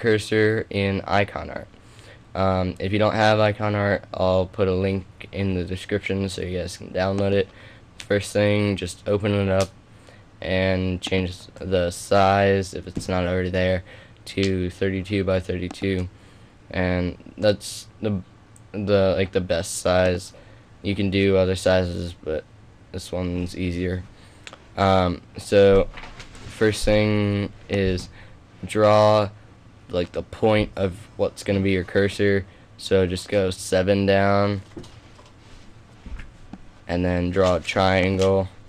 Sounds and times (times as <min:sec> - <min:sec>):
Speech: 0:00.0 - 0:01.7, 0:02.4 - 0:09.7, 0:10.4 - 0:16.1, 0:16.7 - 0:24.1, 0:24.8 - 0:34.7, 0:36.9 - 0:38.6.